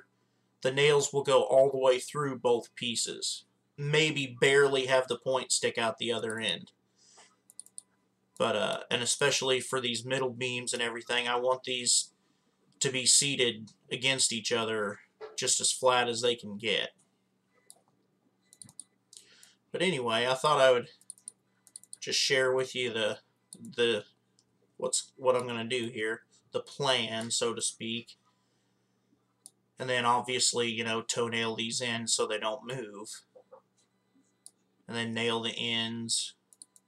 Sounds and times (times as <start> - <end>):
Clicking: 7.5 - 7.9, 17.7 - 17.9, 18.5 - 19.6, 21.0 - 22.0, 23.5 - 23.8, 29.4 - 29.6, 36.5 - 36.8.